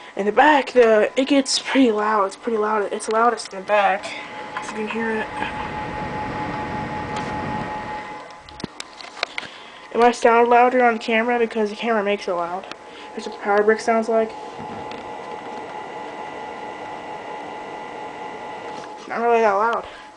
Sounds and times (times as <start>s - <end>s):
Speech: 0.2s - 5.5s, 9.9s - 14.3s, 19.1s - 19.9s.